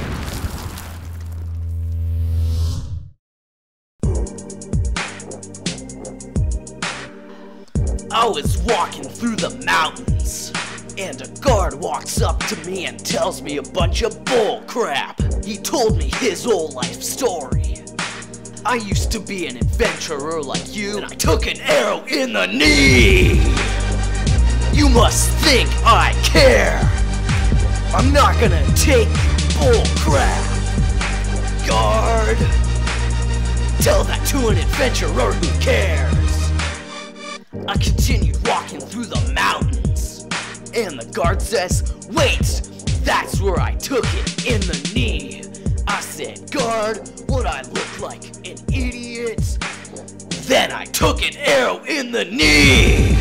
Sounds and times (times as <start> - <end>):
Music: 4.0 - 53.2.